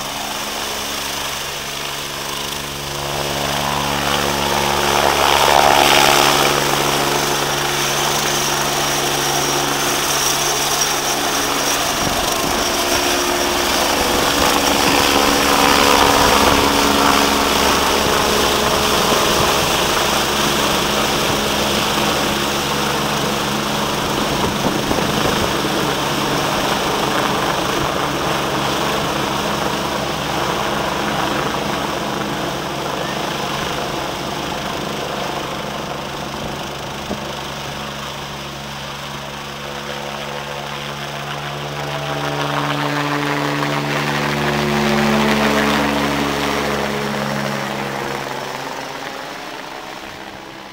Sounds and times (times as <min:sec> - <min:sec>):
Helicopter: 0:00.0 - 0:50.7.